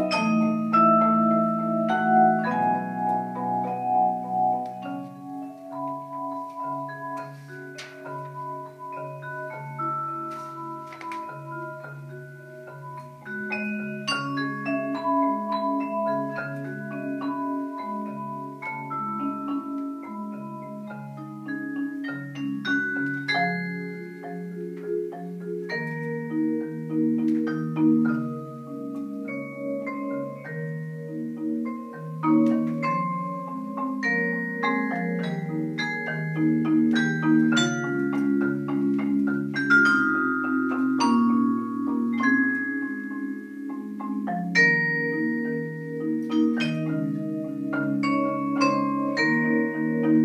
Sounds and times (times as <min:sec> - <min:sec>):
Marimba, xylophone: 0:00.0 - 0:50.2.